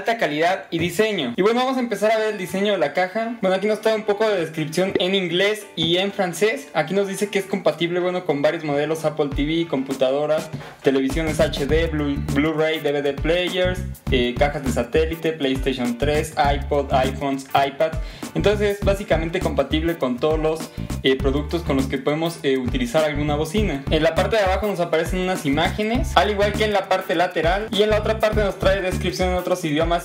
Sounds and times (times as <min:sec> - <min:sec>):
Music: 0:00.0 - 0:30.0
Speech: 0:00.0 - 0:30.0.